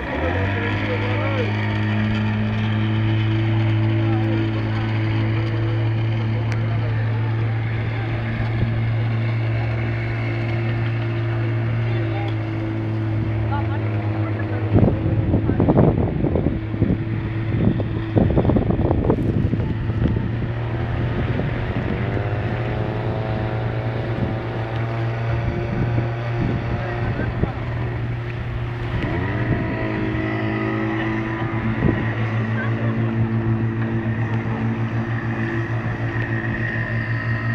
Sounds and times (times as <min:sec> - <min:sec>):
Motorboat, speedboat: 0:00.0 - 0:37.5
Wind noise (microphone): 0:14.6 - 0:34.4.